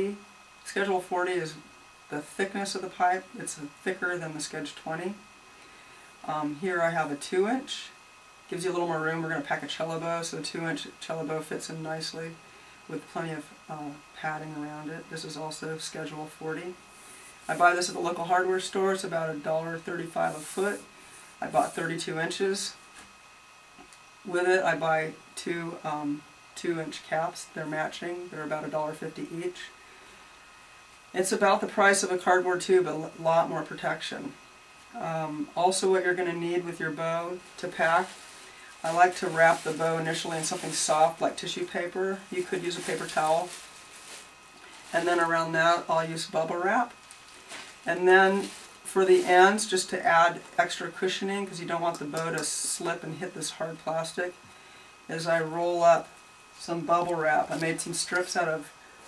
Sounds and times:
Speech: 0.0s - 5.3s, 6.2s - 16.8s, 17.5s - 22.8s, 24.3s - 29.8s, 31.1s - 38.2s, 38.8s - 43.7s, 44.9s - 47.0s, 47.9s - 54.4s, 55.1s - 58.7s.

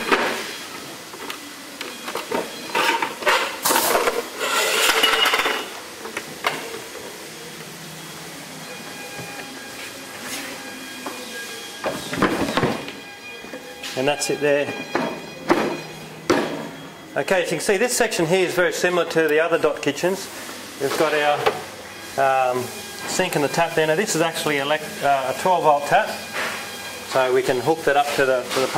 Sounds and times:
Dishes, pots, and pans: 2.4s - 5.7s.

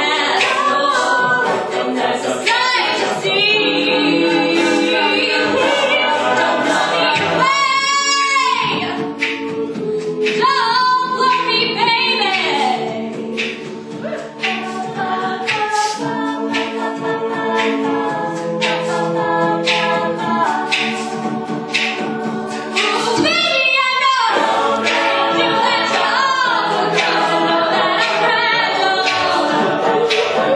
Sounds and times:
Music: 0.0s - 30.5s
Female singing: 10.3s - 12.9s, 22.8s - 24.4s.

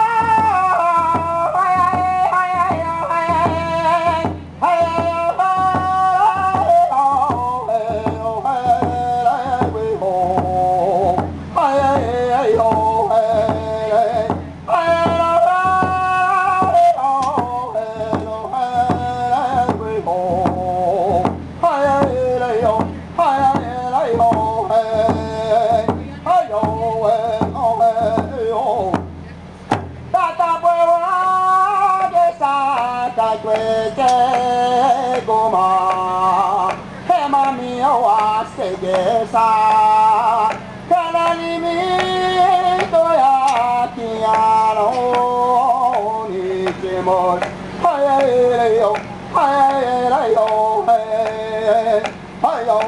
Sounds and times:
Music: 0.0s - 52.8s
Speech: 25.7s - 26.8s.

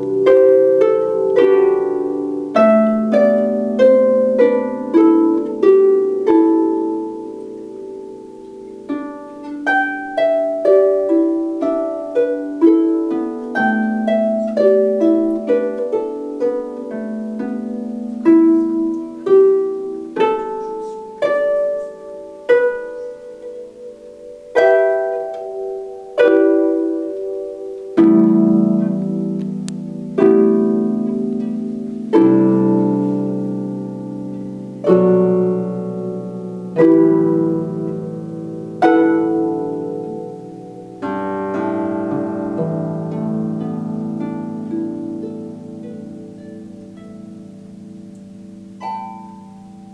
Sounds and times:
Harp: 0.0s - 49.9s
Plucked string instrument: 0.0s - 49.9s.

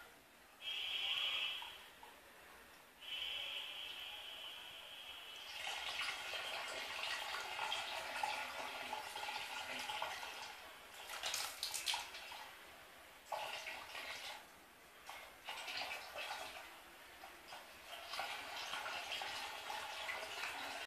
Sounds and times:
Water: 5.3s - 20.8s
Water tap, faucet: 5.4s - 12.5s, 13.3s - 14.5s, 15.1s - 20.8s.

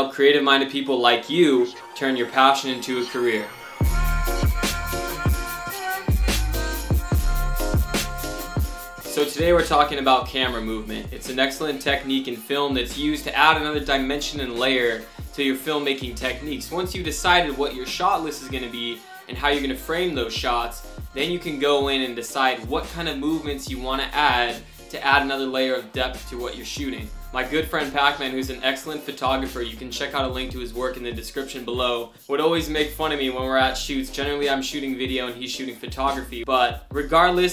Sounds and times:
Speech: 0.0s - 3.6s, 9.1s - 37.5s
Music: 0.0s - 37.5s.

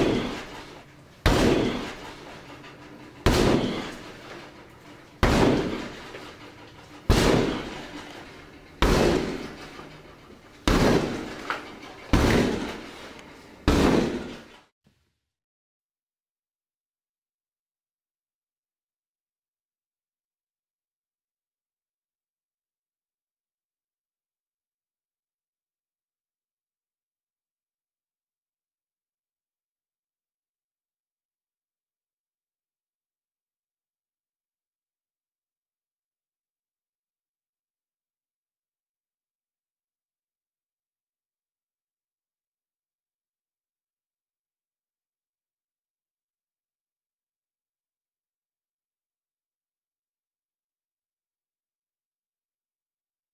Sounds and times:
Sliding door: 0.0s - 14.6s.

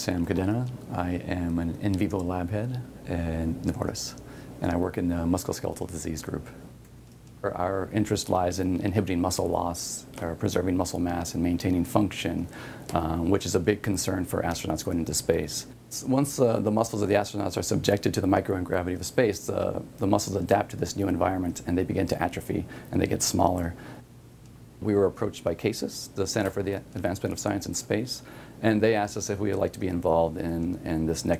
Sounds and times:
Speech: 0.0s - 6.6s, 7.4s - 23.8s, 24.8s - 31.3s.

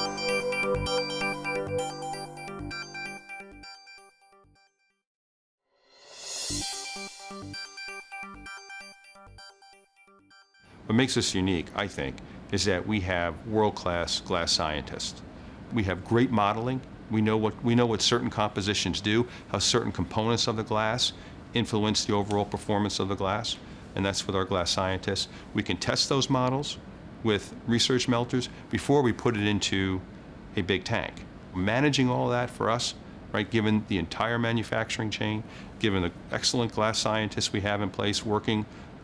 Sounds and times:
Speech: 10.9s - 38.7s.

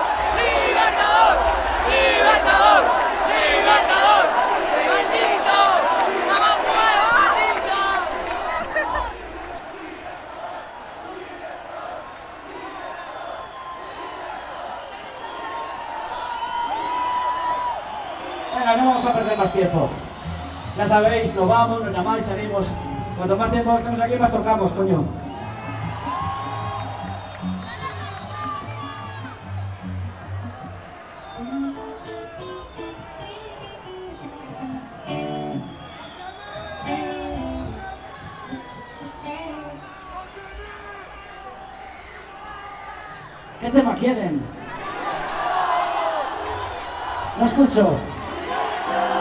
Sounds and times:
Crowd: 0.0s - 49.2s.

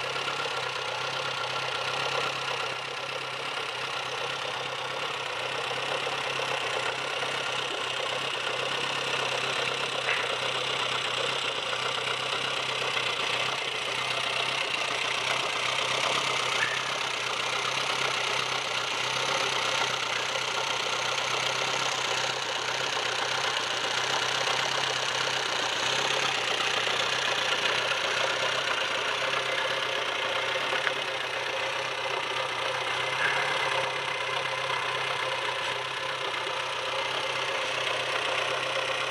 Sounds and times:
Vehicle: 0.0s - 39.1s.

